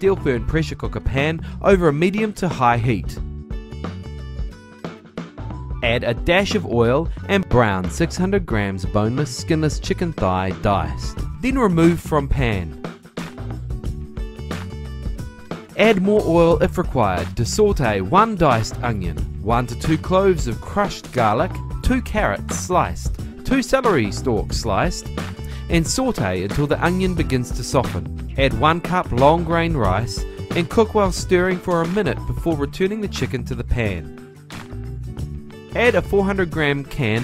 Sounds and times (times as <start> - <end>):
Speech: 0.0 - 3.2, 5.8 - 12.8, 15.8 - 25.1, 25.7 - 34.1, 35.8 - 37.2
Music: 0.0 - 37.2.